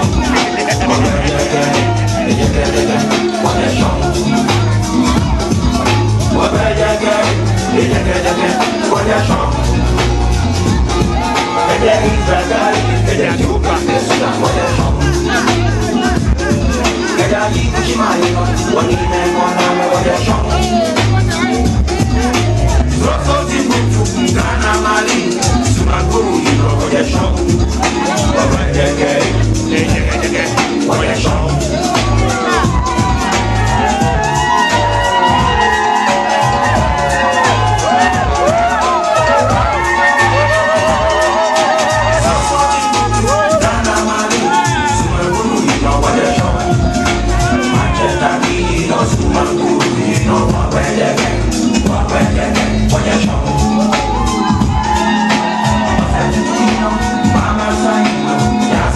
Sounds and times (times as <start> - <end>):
Maraca: 0.0 - 58.9.